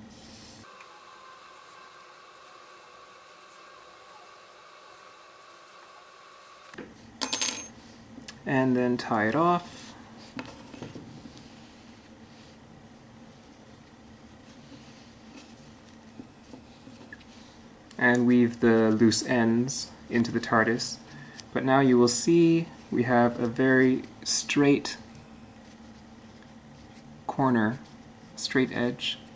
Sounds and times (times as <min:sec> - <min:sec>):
Speech: 0:08.4 - 0:09.7, 0:18.0 - 0:21.0, 0:21.6 - 0:25.0, 0:27.3 - 0:27.8, 0:28.4 - 0:29.3.